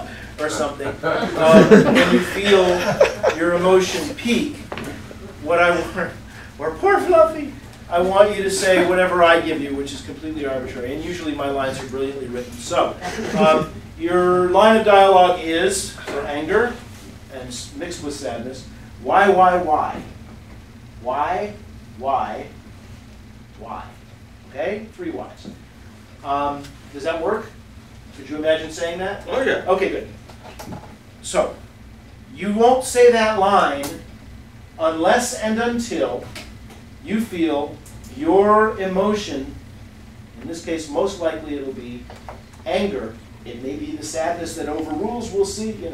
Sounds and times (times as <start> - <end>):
Speech: 0.0 - 20.2, 21.0 - 22.6, 23.6 - 25.6, 26.2 - 27.6, 28.2 - 30.2, 31.2 - 31.6, 32.3 - 34.1, 34.8 - 36.4, 37.0 - 39.6, 40.4 - 45.9.